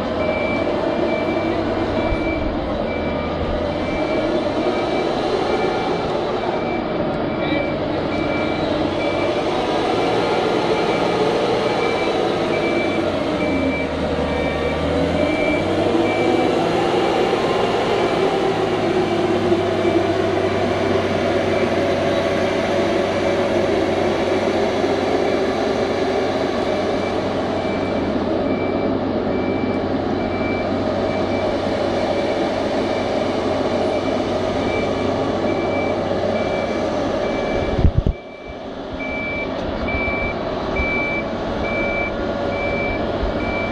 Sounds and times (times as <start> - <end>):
Vehicle: 0.0 - 43.7.